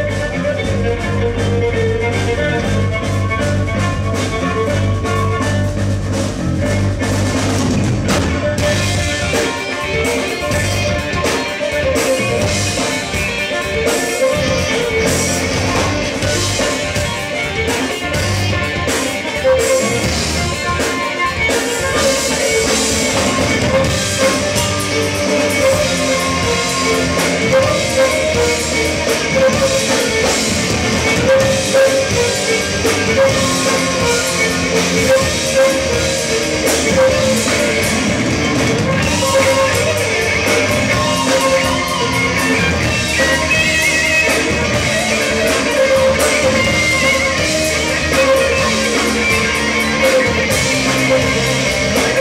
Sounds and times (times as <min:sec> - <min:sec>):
Violin, fiddle: 0:00.0 - 0:52.2.